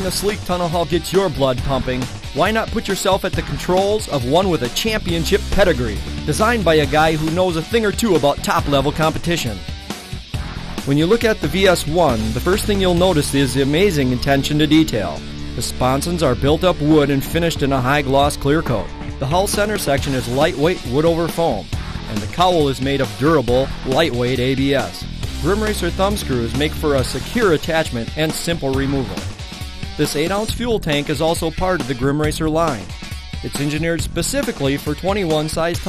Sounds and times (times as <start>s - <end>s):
Speech: 0.0s - 9.6s, 10.9s - 29.2s, 30.0s - 35.8s
Music: 0.0s - 35.8s.